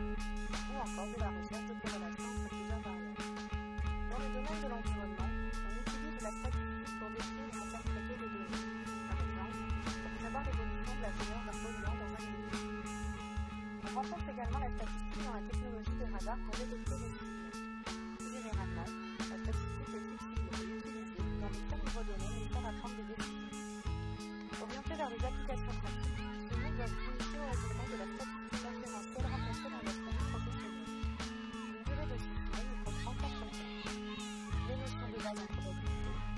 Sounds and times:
Music: 0.0s - 36.3s
Speech: 0.5s - 3.1s, 4.0s - 12.3s, 13.8s - 17.3s, 18.2s - 23.4s, 24.5s - 30.8s, 31.6s - 36.3s.

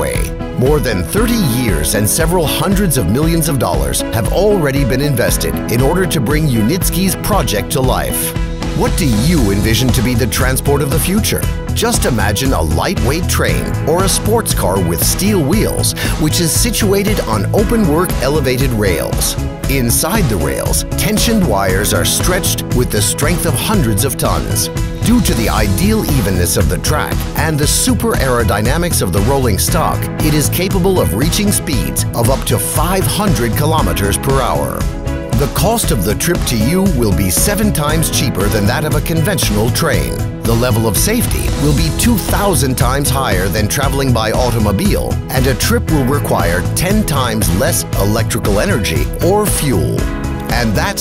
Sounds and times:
Music: 0.0s - 51.0s
Speech: 0.0s - 51.0s.

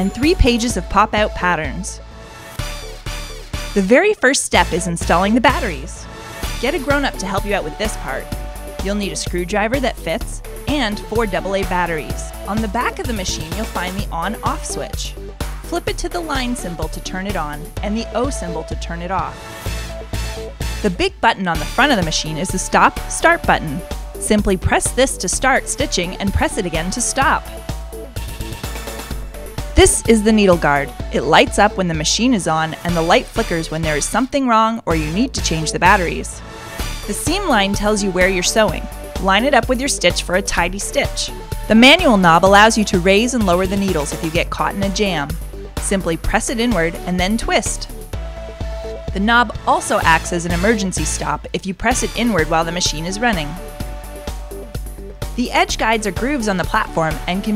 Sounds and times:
Speech: 0.0s - 2.0s, 3.8s - 6.0s, 6.6s - 15.1s, 15.7s - 19.4s, 20.8s - 27.5s, 29.8s - 36.4s, 37.1s - 47.9s, 49.2s - 53.6s, 55.4s - 57.5s
Music: 0.0s - 57.5s.

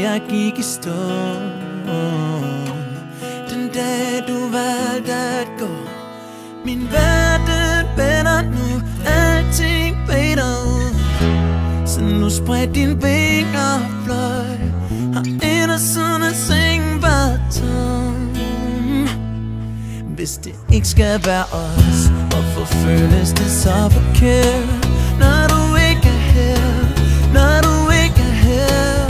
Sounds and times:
Music: 0.0s - 29.1s.

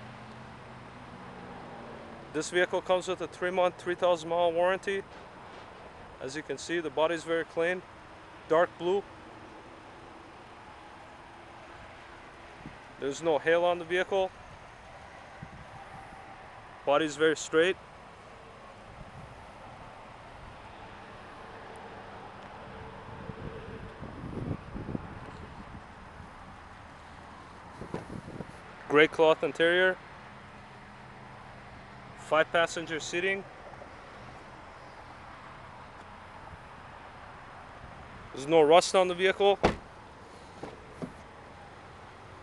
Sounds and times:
Speech: 2.4s - 5.0s, 6.2s - 7.8s, 8.5s - 9.0s, 13.0s - 14.3s, 16.9s - 17.8s, 28.9s - 30.0s, 32.2s - 33.5s, 38.4s - 39.7s.

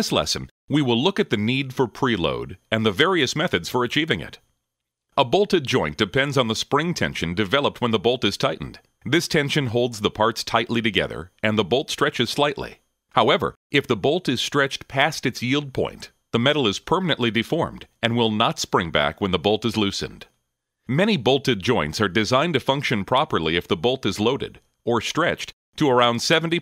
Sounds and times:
Speech: 0.0s - 4.4s, 5.2s - 20.3s, 20.9s - 26.6s.

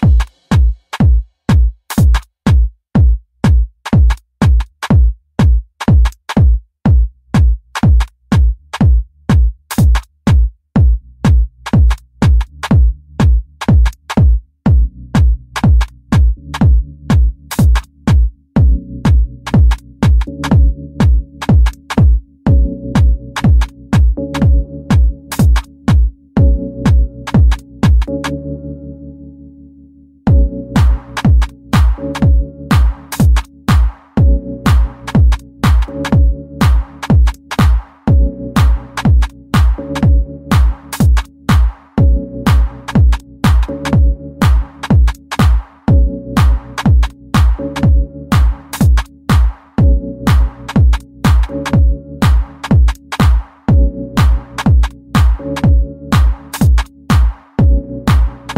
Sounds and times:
Music: 0.0s - 58.5s.

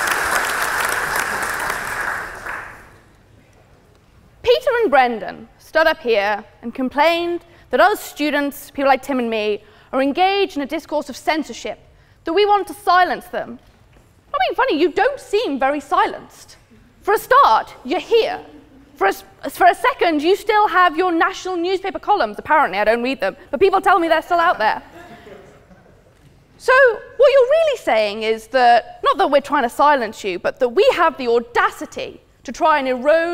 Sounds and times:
Female speech, woman speaking: 4.4s - 13.6s, 14.3s - 24.9s, 26.6s - 33.3s.

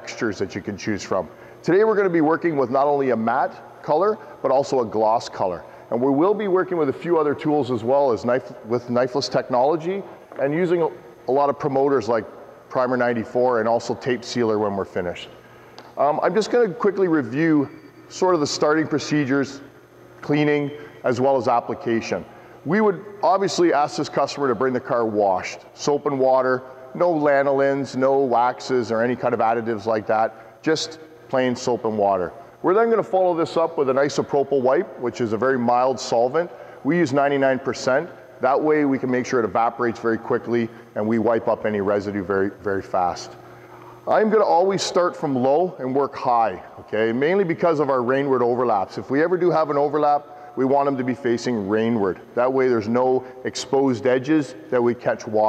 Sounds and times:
Speech: 0.0s - 15.4s, 16.0s - 43.4s, 44.0s - 55.4s.

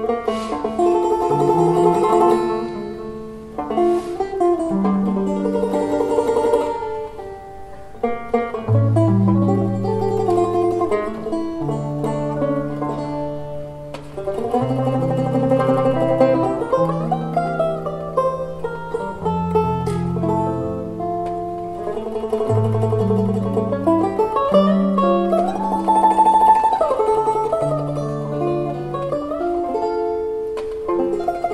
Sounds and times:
Blues: 0.0s - 31.5s.

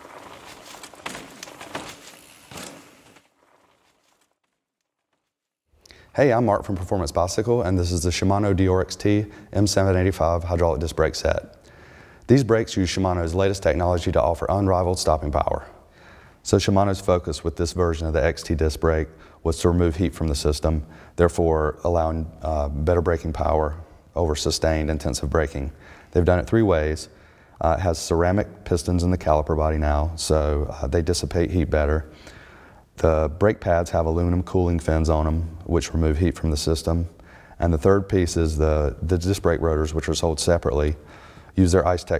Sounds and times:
Speech: 6.1s - 11.6s, 12.3s - 15.8s, 16.4s - 32.1s, 33.0s - 41.0s, 41.6s - 42.1s.

